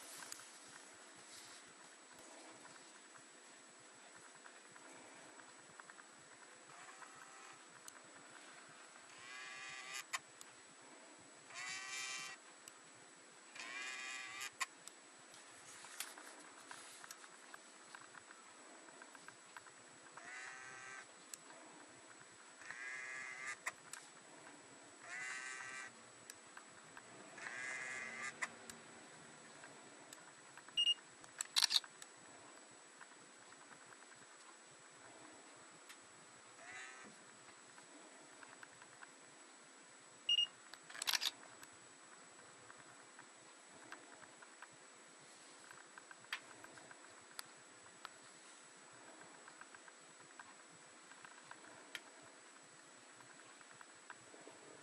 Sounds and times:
Camera: 6.7 - 7.6, 9.1 - 10.2, 11.5 - 12.4, 13.6 - 14.7, 20.2 - 21.1, 22.6 - 23.8, 25.1 - 25.9, 27.4 - 28.5, 30.8 - 31.9, 40.3 - 41.4.

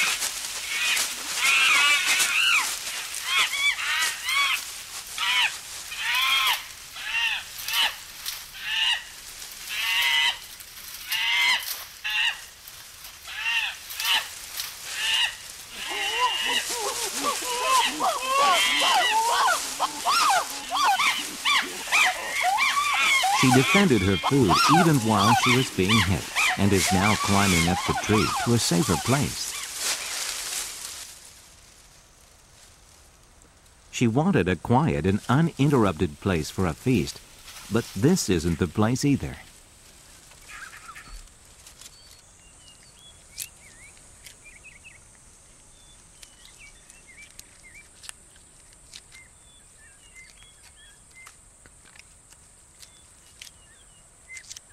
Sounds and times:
Wild animals: 14.9 - 29.7.

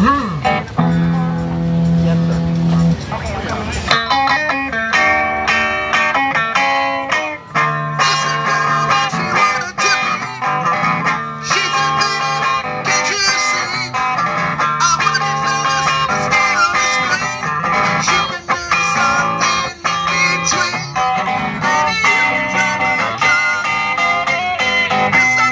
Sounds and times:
Electric guitar: 0.0 - 25.5.

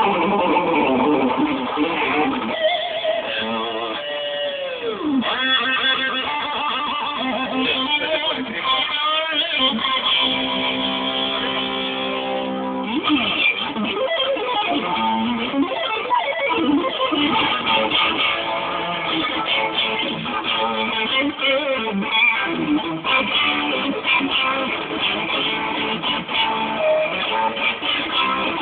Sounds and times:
Electric guitar: 0.0 - 28.6
Strum: 0.0 - 28.6.

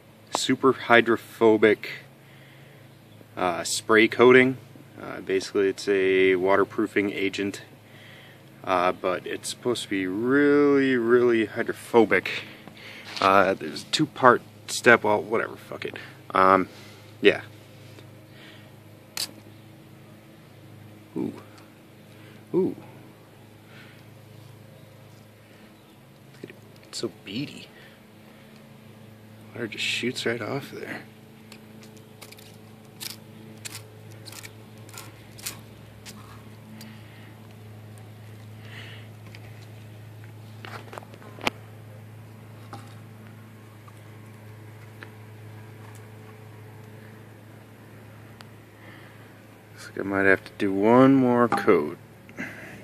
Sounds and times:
Speech: 0.3 - 2.1, 3.4 - 7.7, 8.6 - 12.5, 13.2 - 17.5, 21.2 - 21.5, 26.9 - 27.8, 29.5 - 31.1, 49.8 - 52.0.

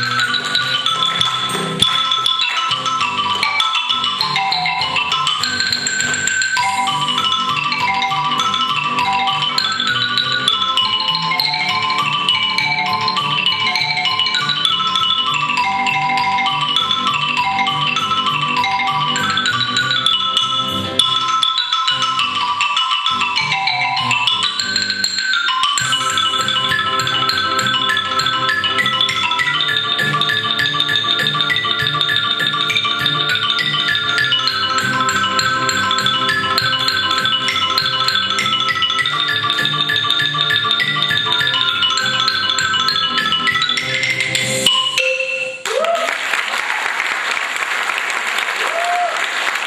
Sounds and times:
Glockenspiel: 0.0 - 46.0
Marimba, xylophone: 0.0 - 46.0.

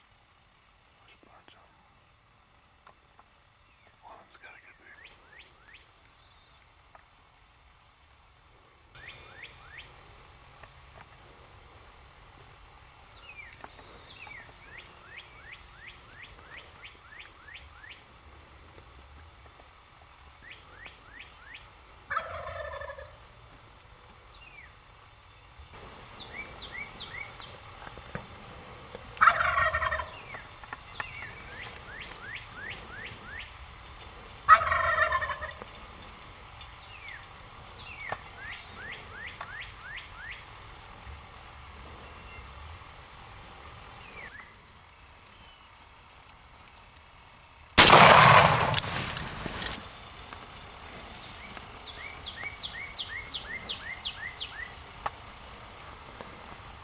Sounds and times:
Gobble: 22.1 - 23.2, 29.2 - 30.4, 34.5 - 35.7.

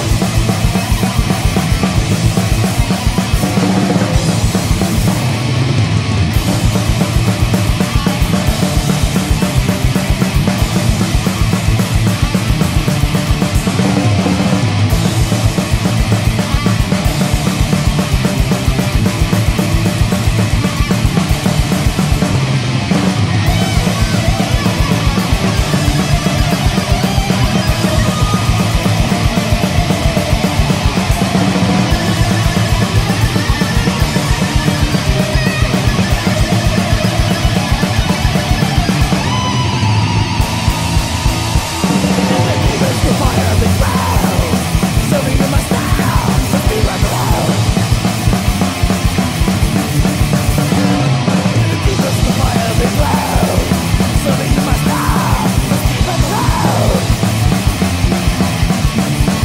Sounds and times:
Heavy metal: 0.0 - 59.4.

